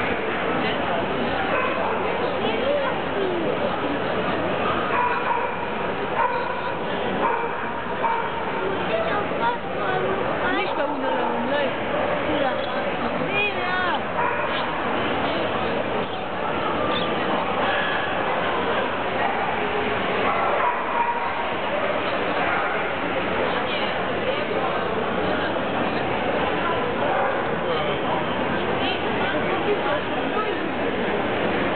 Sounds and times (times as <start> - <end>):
Speech: 0.0 - 31.7
Dog: 1.5 - 2.0, 4.9 - 8.5, 14.2 - 14.7, 20.3 - 21.4.